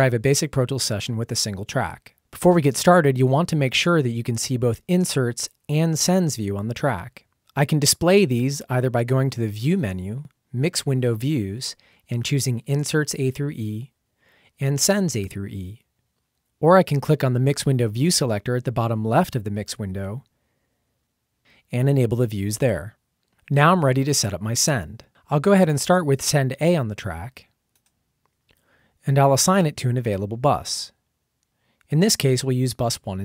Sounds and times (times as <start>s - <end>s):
Speech: 0.0s - 14.0s, 14.6s - 15.9s, 16.6s - 20.3s, 21.7s - 27.5s, 29.0s - 31.0s, 31.9s - 33.2s.